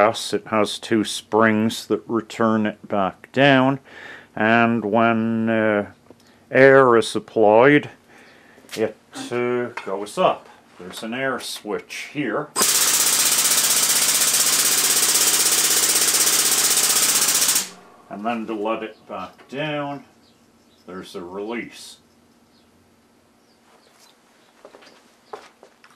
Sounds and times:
Speech: 0:00.0 - 0:03.8, 0:04.4 - 0:08.0, 0:08.7 - 0:12.6, 0:18.1 - 0:20.1, 0:20.9 - 0:22.0.

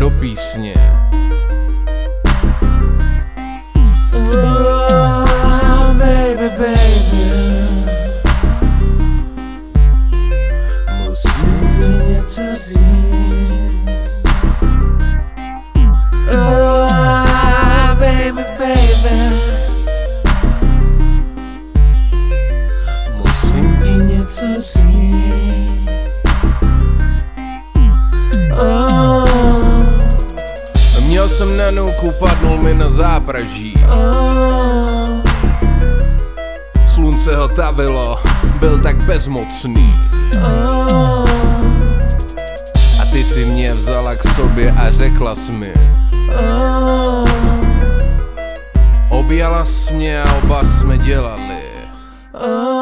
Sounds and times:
Synthesizer: 0:00.0 - 0:52.8.

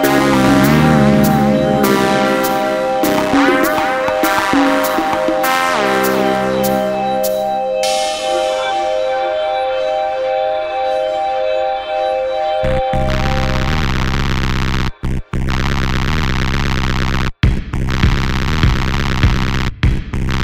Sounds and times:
Electronica: 0:00.0 - 0:17.2
Techno: 0:00.0 - 0:20.4.

